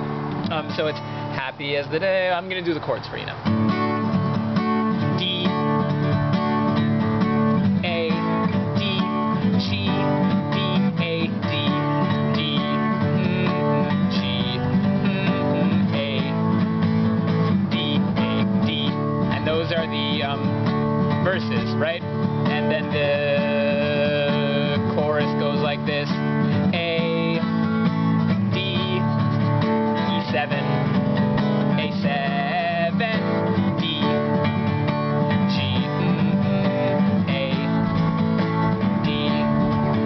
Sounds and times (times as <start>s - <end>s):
Music: 3.4s - 40.0s
Male singing: 5.2s - 5.6s, 7.8s - 16.5s, 17.7s - 20.5s, 21.2s - 27.6s, 28.5s - 29.2s, 30.0s - 30.8s, 31.7s - 34.3s, 35.4s - 38.0s, 38.9s - 40.0s.